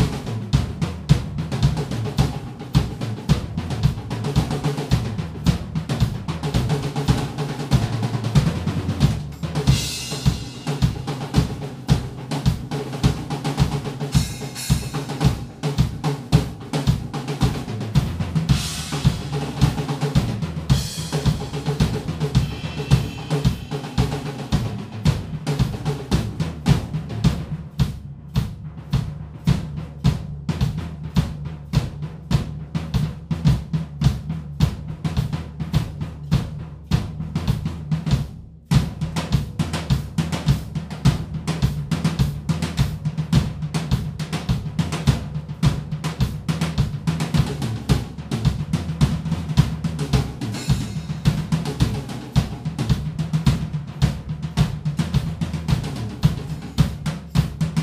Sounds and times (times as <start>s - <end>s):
Bass drum: 0.0s - 57.8s
Drum kit: 0.0s - 57.8s
Drum roll: 0.0s - 57.8s
Rimshot: 1.6s - 31.4s, 43.9s - 57.8s.